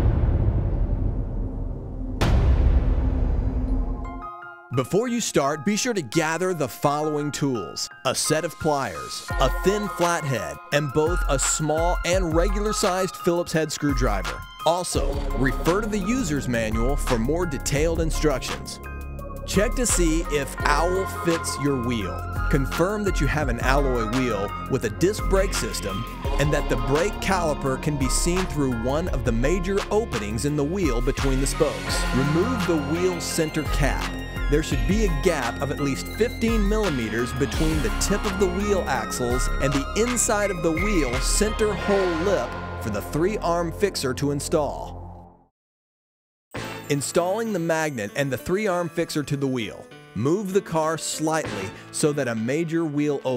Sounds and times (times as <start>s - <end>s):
Music: 0.0s - 45.5s, 46.5s - 53.3s
Speech: 4.8s - 18.8s, 19.5s - 45.0s, 46.9s - 53.3s.